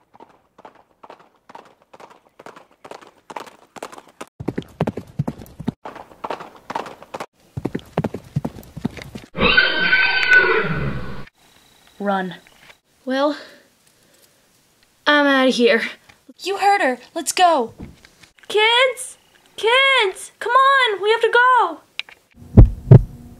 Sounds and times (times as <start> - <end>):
Clip-clop: 0.0 - 9.3
Neigh, whinny: 9.4 - 11.3
Speech: 12.0 - 12.4, 13.0 - 13.6, 15.1 - 17.8, 18.5 - 21.9.